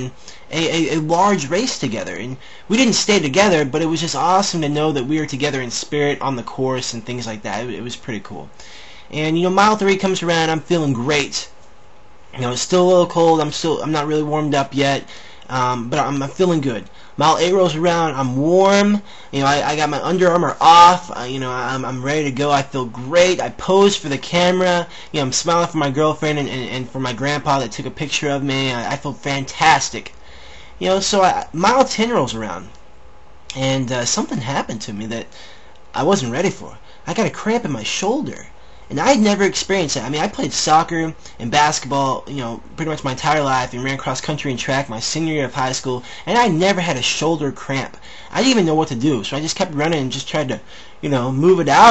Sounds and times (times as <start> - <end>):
Speech: 0.0 - 8.5, 9.1 - 11.6, 12.3 - 30.2, 30.8 - 32.8, 33.5 - 51.9
Inside, small room: 0.0 - 51.9.